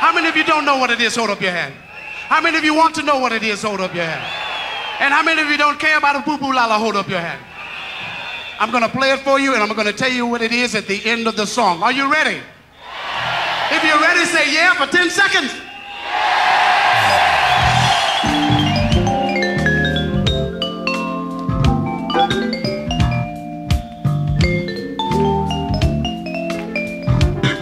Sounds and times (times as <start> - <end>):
Speech: 0.0 - 4.2, 5.0 - 7.4, 8.6 - 12.5, 13.7 - 15.7
Music: 17.0 - 27.6.